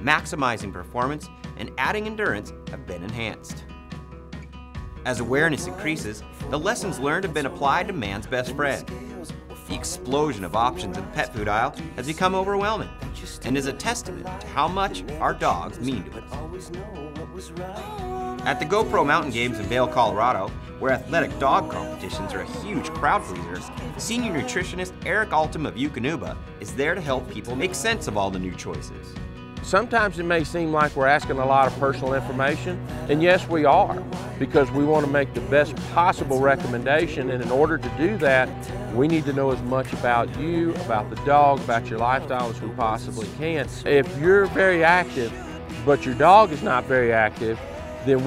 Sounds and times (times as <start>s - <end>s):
Speech: 0.0s - 3.6s, 5.1s - 9.0s, 9.6s - 16.7s, 18.4s - 48.2s
Music: 0.0s - 48.2s.